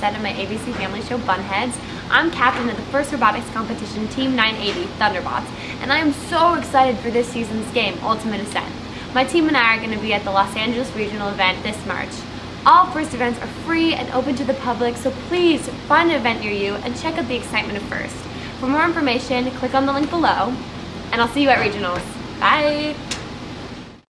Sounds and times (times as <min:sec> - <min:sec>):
Speech: 0:00.0 - 0:20.6, 0:21.2 - 0:23.0.